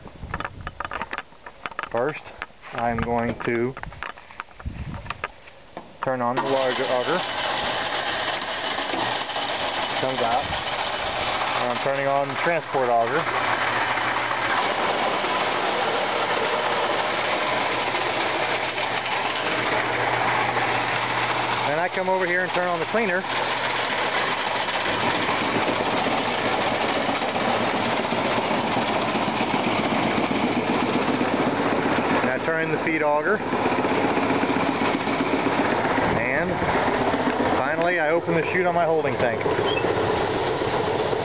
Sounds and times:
Speech: 0:01.9 - 0:03.8, 0:06.0 - 0:07.2, 0:10.0 - 0:10.5, 0:11.6 - 0:13.3, 0:21.7 - 0:23.3, 0:32.2 - 0:33.4, 0:36.1 - 0:36.6, 0:37.6 - 0:39.5.

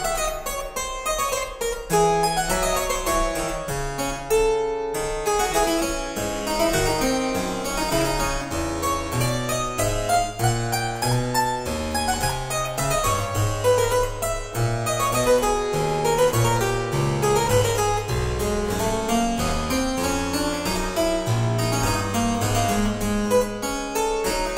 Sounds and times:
Harpsichord: 0:00.0 - 0:24.5.

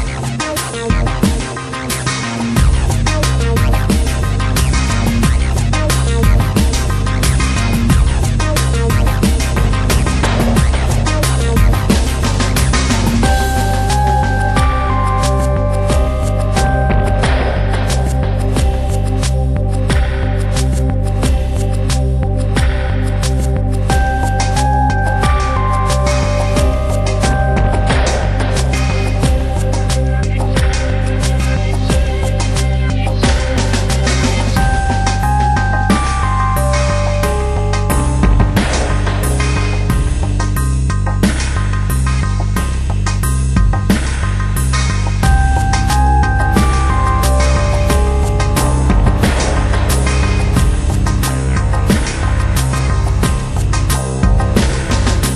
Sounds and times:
Music: 0:00.0 - 0:55.3.

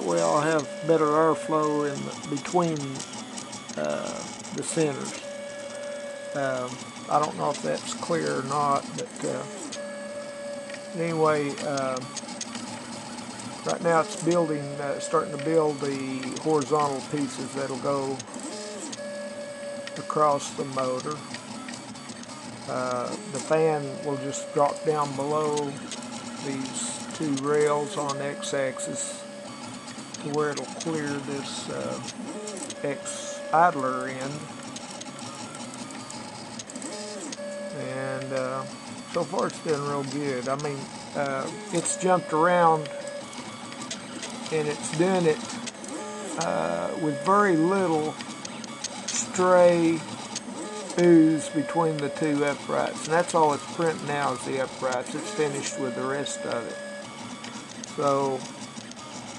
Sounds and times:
Speech: 0:00.0 - 0:03.0, 0:03.8 - 0:05.2, 0:06.4 - 0:09.5, 0:10.9 - 0:12.1, 0:13.7 - 0:18.2, 0:20.0 - 0:21.2, 0:22.7 - 0:25.8, 0:26.4 - 0:29.2, 0:30.2 - 0:32.1, 0:32.8 - 0:34.5, 0:37.7 - 0:42.9, 0:44.5 - 0:45.4, 0:46.4 - 0:48.1, 0:49.2 - 0:50.1, 0:51.0 - 0:56.8, 0:58.0 - 0:58.4
Printer: 0:00.0 - 0:59.3.

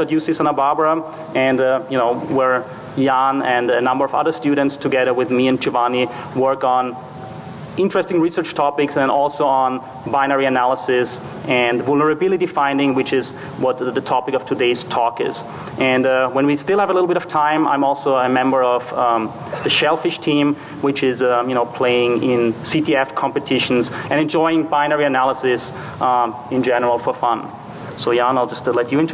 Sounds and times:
Speech: 0:00.0 - 0:07.0, 0:07.8 - 0:29.1.

